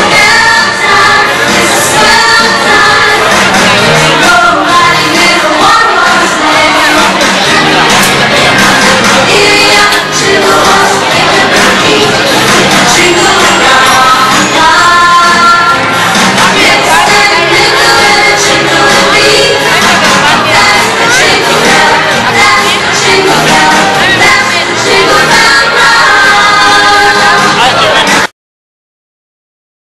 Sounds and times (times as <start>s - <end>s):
Music: 0.0s - 28.3s.